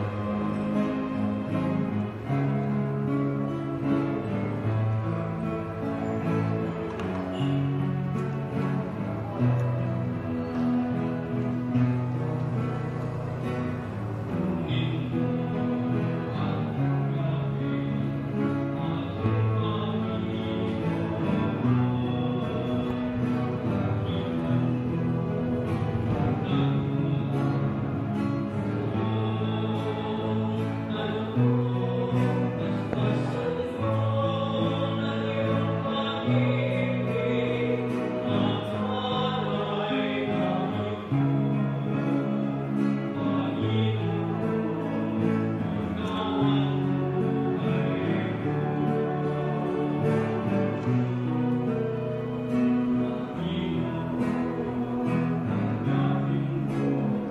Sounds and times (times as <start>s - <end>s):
Music: 0.0s - 57.3s.